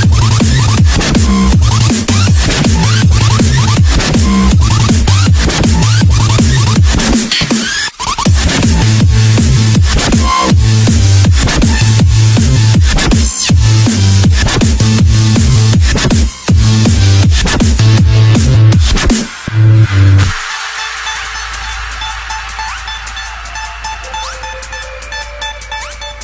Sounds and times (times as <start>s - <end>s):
Dubstep: 0.0s - 26.2s.